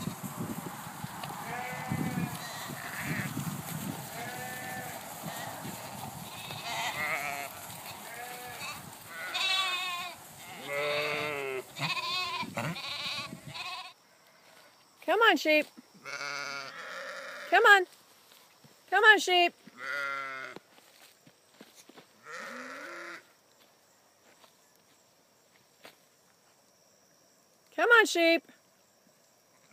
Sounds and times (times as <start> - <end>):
Bleat: 1.4 - 3.4, 4.2 - 14.0, 16.0 - 17.6, 19.8 - 20.6, 22.2 - 23.3.